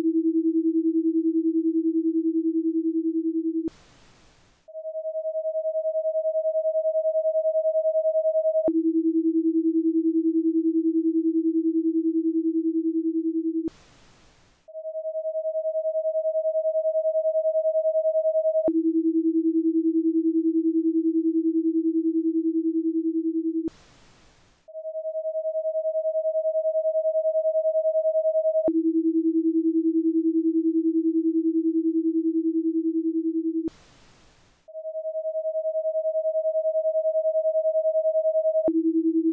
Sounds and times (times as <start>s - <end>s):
Sine wave: 0.0s - 39.3s.